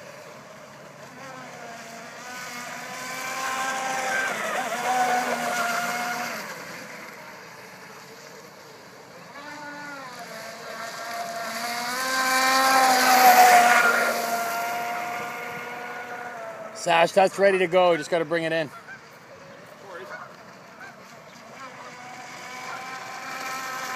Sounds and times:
Motorboat, speedboat: 0.0 - 23.9
Speech: 16.8 - 18.7.

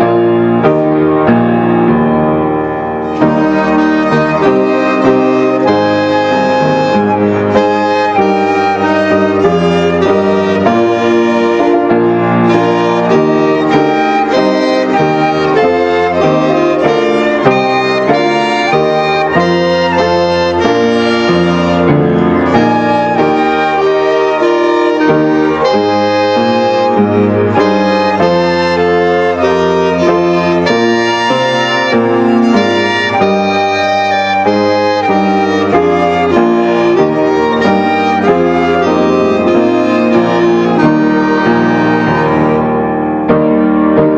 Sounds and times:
Violin, fiddle: 3.0 - 43.0.

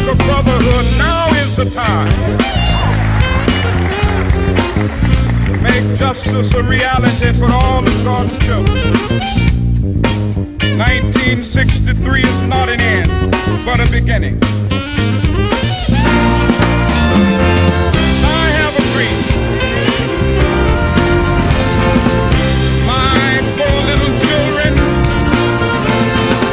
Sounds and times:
Speech: 0.0 - 2.2, 5.6 - 8.8, 10.6 - 14.4, 18.2 - 19.4, 22.8 - 24.9
Music: 0.0 - 26.5.

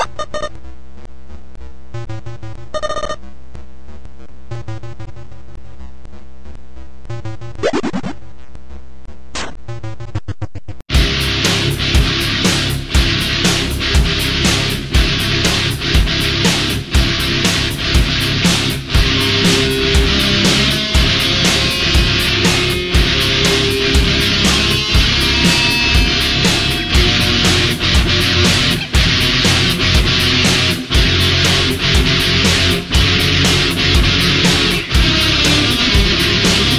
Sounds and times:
Rhythm and blues: 10.9 - 36.7.

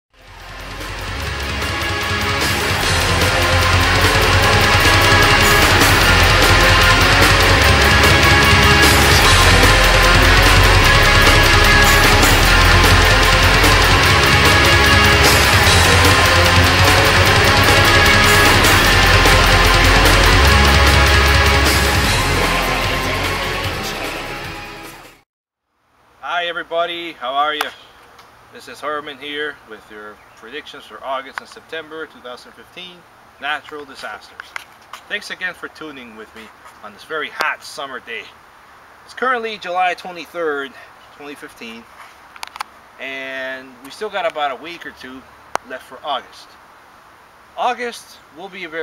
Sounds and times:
Angry music: 0.2 - 25.2.

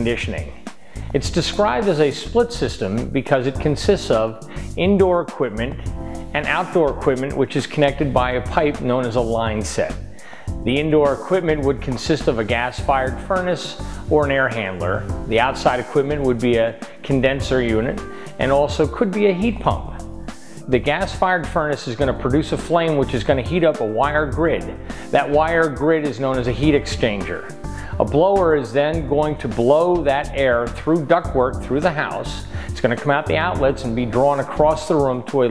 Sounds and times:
Speech: 0.0 - 10.0, 10.6 - 20.0, 20.7 - 35.5
Music: 0.0 - 35.5.

